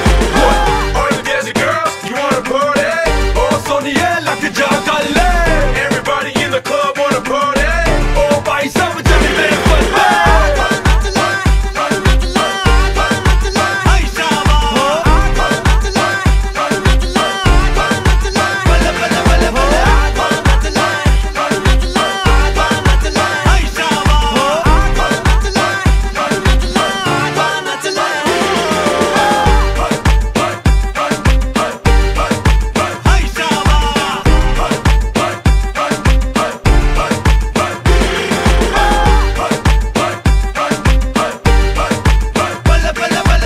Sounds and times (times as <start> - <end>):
Music: 0.0 - 43.4.